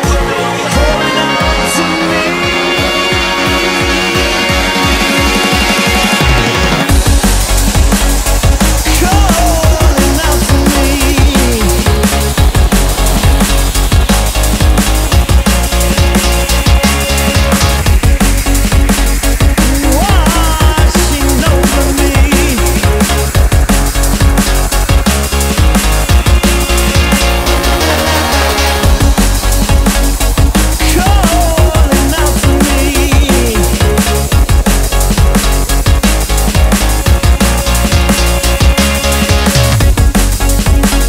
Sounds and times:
Drum and bass: 0:00.0 - 0:41.0.

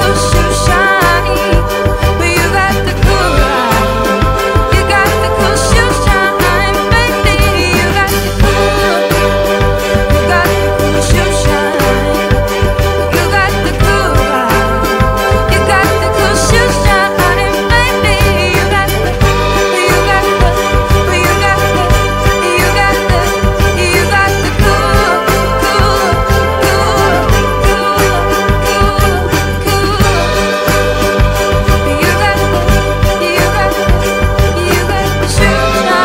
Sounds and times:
Singing: 0:00.0 - 0:30.8, 0:31.7 - 0:36.0
Orchestra: 0:00.0 - 0:36.0.

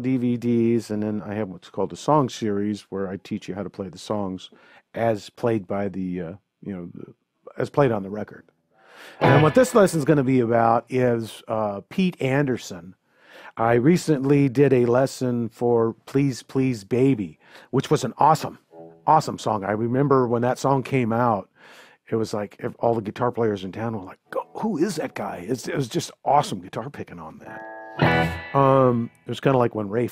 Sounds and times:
Speech: 0:00.0 - 0:08.4, 0:09.2 - 0:27.6, 0:28.6 - 0:30.1.

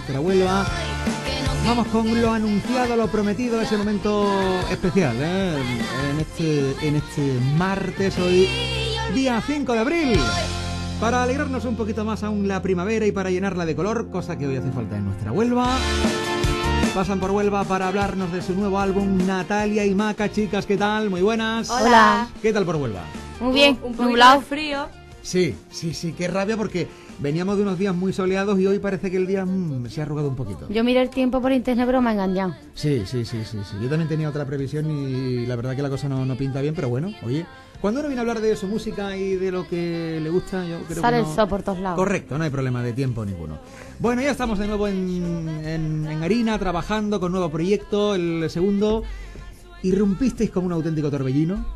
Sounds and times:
Music: 0:00.0 - 0:51.7
Speech: 0:01.6 - 0:10.4, 0:11.0 - 0:15.8, 0:16.9 - 0:24.7, 0:25.3 - 0:49.0, 0:49.9 - 0:51.7.

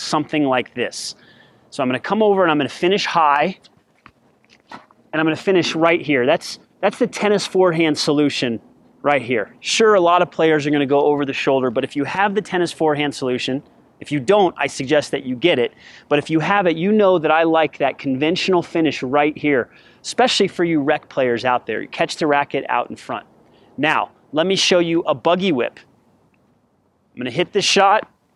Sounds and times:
Speech: 0:00.0 - 0:03.6, 0:05.1 - 0:25.9, 0:27.2 - 0:28.2.

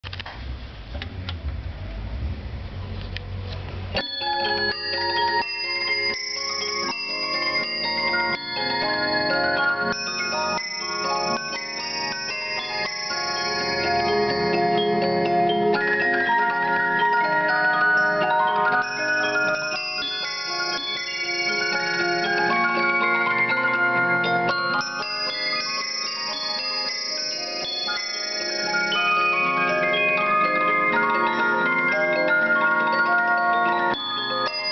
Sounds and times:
Bell: 0:03.9 - 0:34.7.

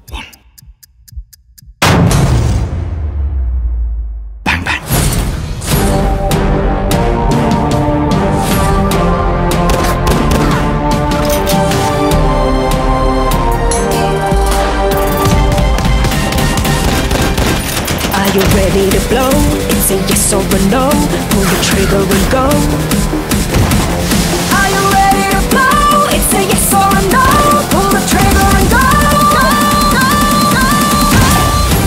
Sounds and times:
Music: 0:01.8 - 0:31.8
Fusillade: 0:15.3 - 0:19.0.

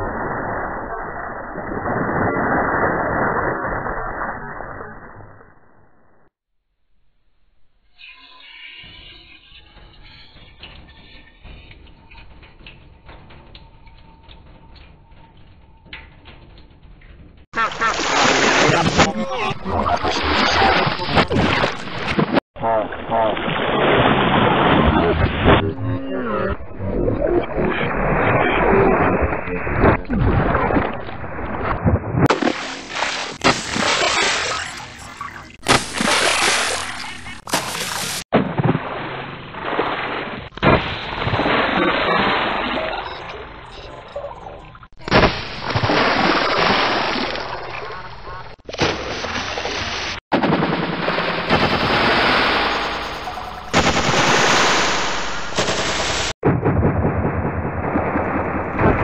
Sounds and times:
Sound effect: 0:00.0 - 0:06.3, 0:07.6 - 0:49.7, 0:50.4 - 0:59.0.

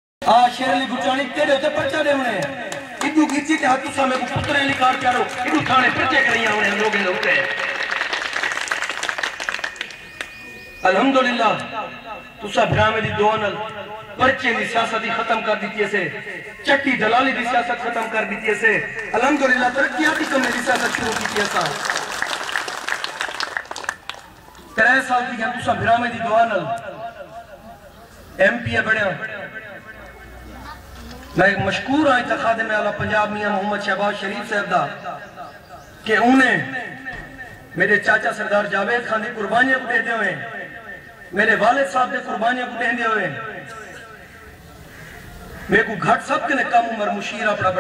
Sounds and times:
Male speech, man speaking: 0:00.2 - 0:07.8, 0:10.8 - 0:21.8, 0:24.8 - 0:26.9, 0:28.4 - 0:29.6, 0:31.4 - 0:35.2, 0:36.1 - 0:37.0, 0:37.7 - 0:40.7, 0:41.4 - 0:44.0, 0:45.7 - 0:47.8
Narration, monologue: 0:00.2 - 0:08.1, 0:10.0 - 0:22.8, 0:24.7 - 0:47.8.

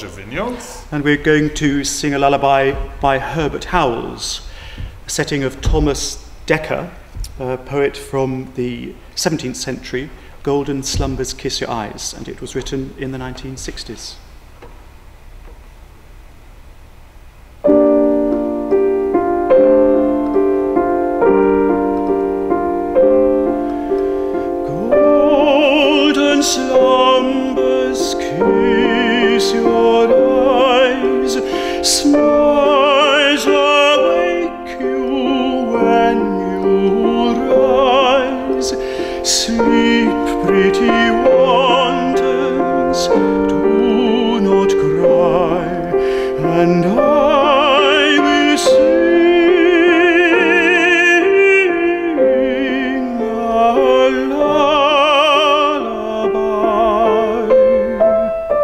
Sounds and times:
Lullaby: 0:17.7 - 0:58.6.

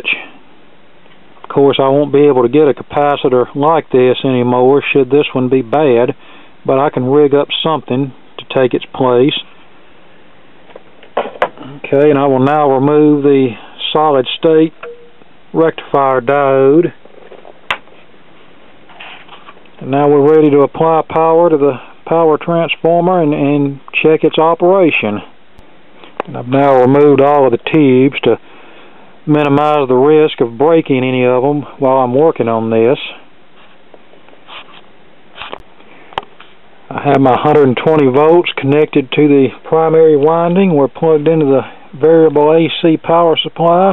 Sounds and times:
Speech: 0:00.0 - 0:00.4, 0:01.4 - 0:09.5, 0:11.6 - 0:14.8, 0:15.5 - 0:17.0, 0:19.8 - 0:25.3, 0:26.3 - 0:28.4, 0:29.3 - 0:33.3, 0:36.9 - 0:43.9.

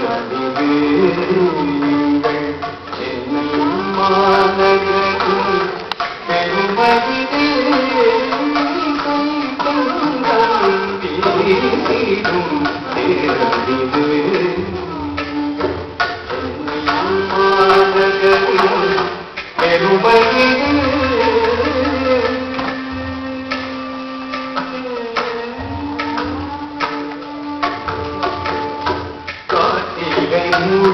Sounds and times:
Traditional music: 0:00.0 - 0:30.9.

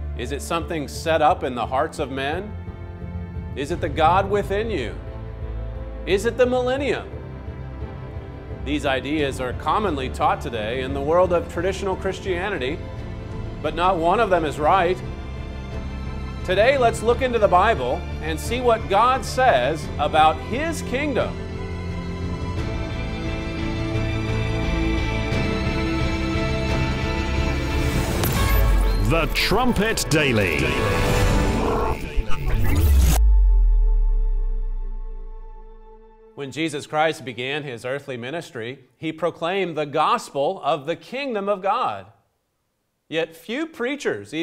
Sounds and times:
Speech: 0:00.2 - 0:02.5, 0:03.6 - 0:05.0, 0:06.1 - 0:07.1, 0:08.7 - 0:12.8, 0:13.6 - 0:15.0, 0:16.5 - 0:21.4, 0:29.0 - 0:31.0, 0:36.4 - 0:42.2, 0:43.1 - 0:44.4.

